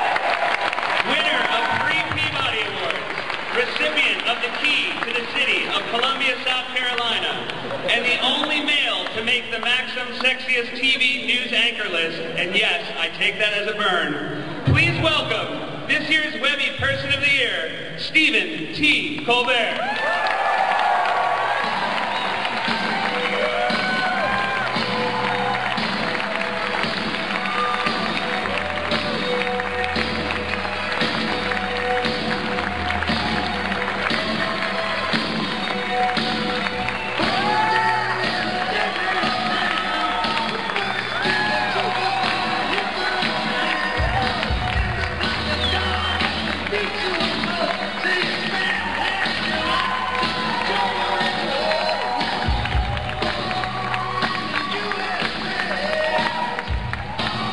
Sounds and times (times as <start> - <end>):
Music: 0.0 - 57.5.